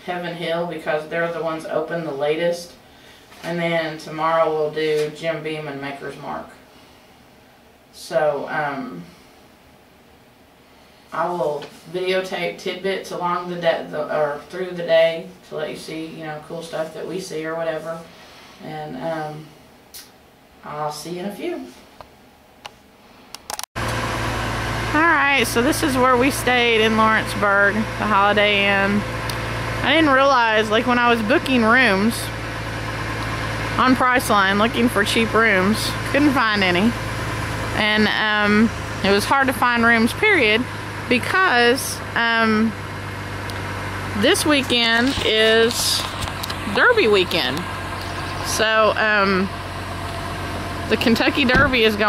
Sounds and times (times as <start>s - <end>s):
Speech: 0.0s - 2.8s, 3.4s - 6.6s, 8.0s - 9.1s, 11.2s - 19.6s, 20.6s - 21.8s, 25.0s - 29.1s, 29.8s - 32.3s, 33.8s - 37.0s, 37.8s - 42.8s, 44.2s - 46.1s, 46.7s - 47.6s, 48.5s - 49.5s, 50.9s - 52.0s
Vacuum cleaner: 23.8s - 28.1s.